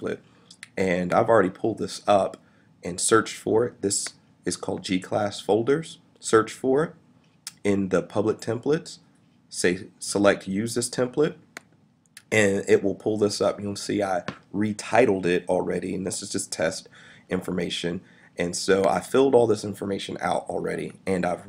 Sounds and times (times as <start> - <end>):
Speech: 0.0 - 11.5, 12.2 - 21.4.